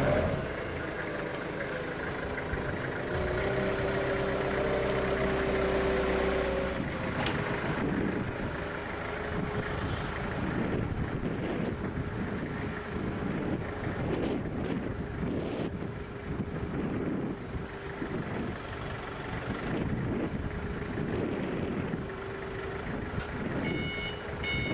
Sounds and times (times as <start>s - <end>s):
Truck: 0.0s - 24.7s.